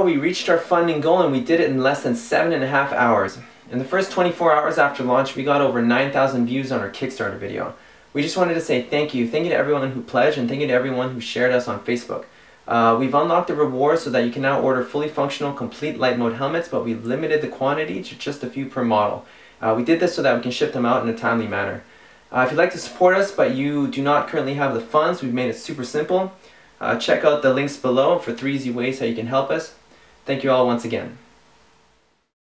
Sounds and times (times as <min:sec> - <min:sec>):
Speech: 0:00.0 - 0:31.3.